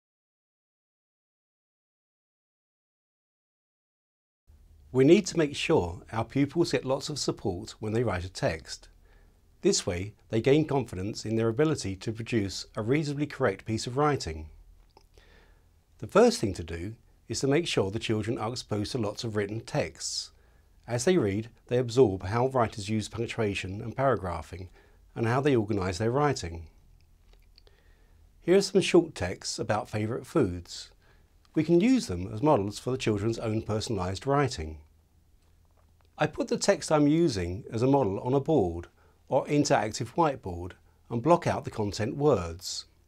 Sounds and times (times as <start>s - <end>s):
Speech: 4.9s - 9.0s, 9.6s - 14.6s, 16.0s - 26.8s, 28.4s - 34.9s, 36.2s - 43.0s.